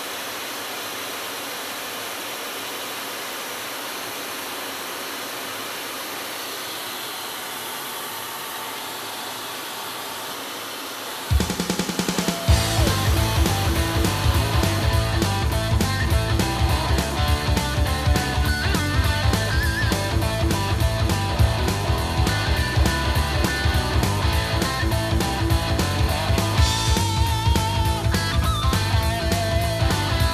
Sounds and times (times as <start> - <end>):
Music: 11.3 - 30.3.